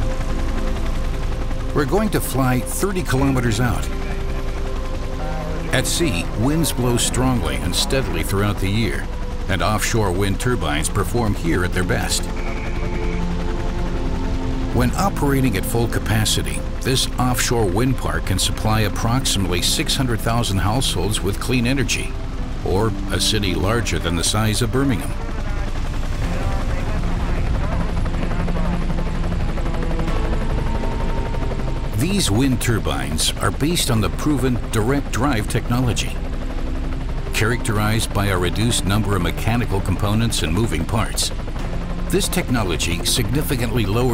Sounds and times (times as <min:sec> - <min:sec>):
Music: 0:00.0 - 0:44.1
Speech: 0:01.8 - 0:04.0, 0:05.2 - 0:12.3, 0:14.7 - 0:28.6, 0:32.0 - 0:36.2, 0:37.4 - 0:41.4, 0:42.1 - 0:44.1.